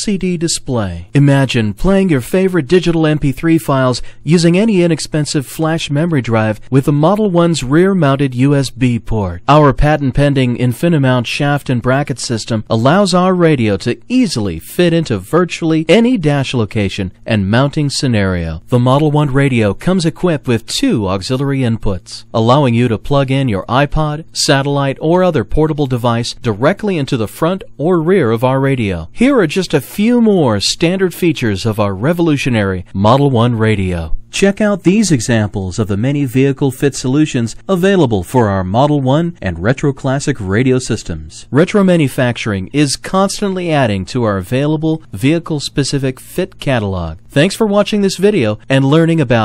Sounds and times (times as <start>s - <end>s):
Speech: 0.0s - 49.4s.